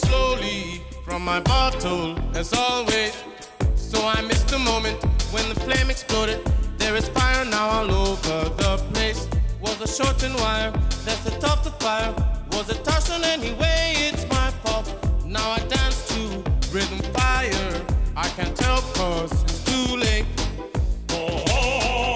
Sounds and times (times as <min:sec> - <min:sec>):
Music: 0:00.0 - 0:22.1.